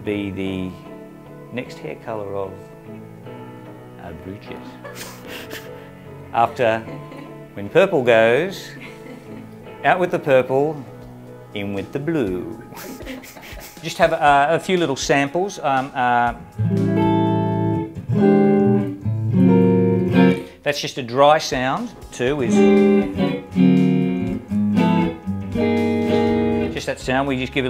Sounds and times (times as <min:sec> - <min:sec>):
Speech: 0:00.0 - 0:00.8, 0:01.5 - 0:02.6, 0:04.0 - 0:04.8, 0:06.4 - 0:06.9, 0:07.6 - 0:08.8, 0:09.8 - 0:10.8, 0:11.6 - 0:12.6, 0:13.8 - 0:16.4, 0:20.6 - 0:22.6, 0:26.7 - 0:27.7
Electric guitar: 0:04.6 - 0:07.6, 0:16.4 - 0:20.6, 0:22.4 - 0:26.8
Effects unit: 0:16.0 - 0:20.6, 0:22.2 - 0:27.7.